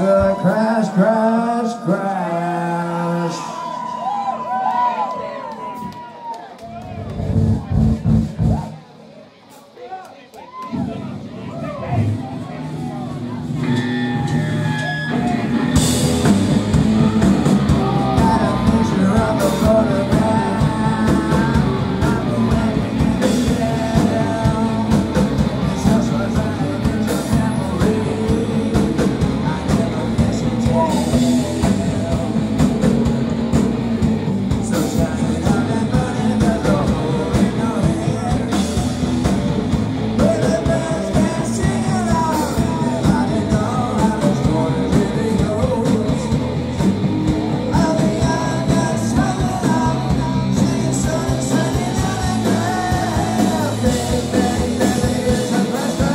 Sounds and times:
Music: 6.6 - 9.7, 10.7 - 56.1.

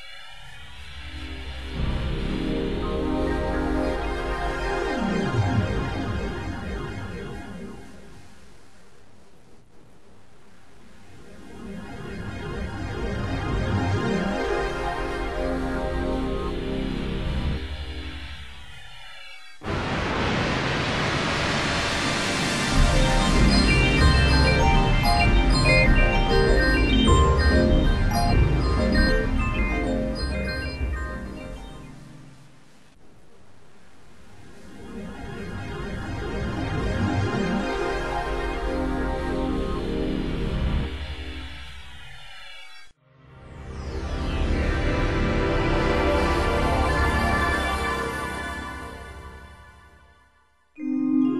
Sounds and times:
Music: 0.9 - 7.5, 11.6 - 18.6, 21.8 - 32.7, 35.7 - 41.6, 43.0 - 51.3
Sound effect: 11.1 - 32.9, 34.3 - 51.3.

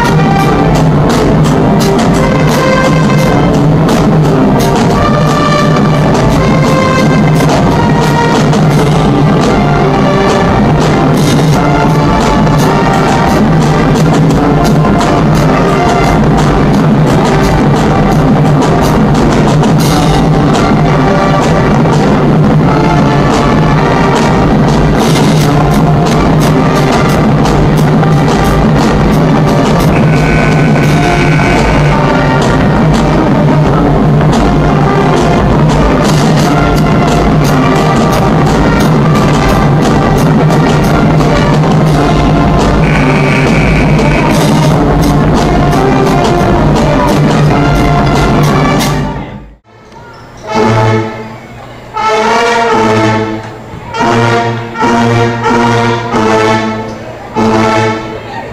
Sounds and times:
Music: 0.0 - 58.5.

